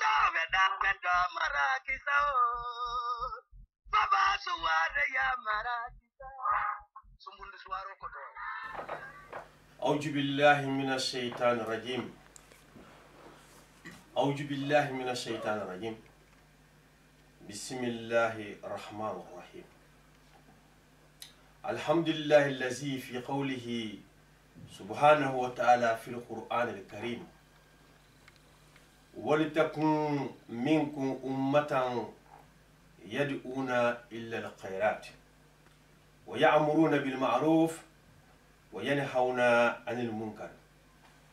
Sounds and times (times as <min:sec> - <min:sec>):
Speech: 0:00.0 - 0:02.4, 0:04.0 - 0:12.2, 0:14.2 - 0:16.1, 0:17.4 - 0:19.7, 0:21.6 - 0:27.4, 0:29.2 - 0:32.2, 0:33.0 - 0:35.2, 0:36.3 - 0:37.9, 0:38.7 - 0:40.6.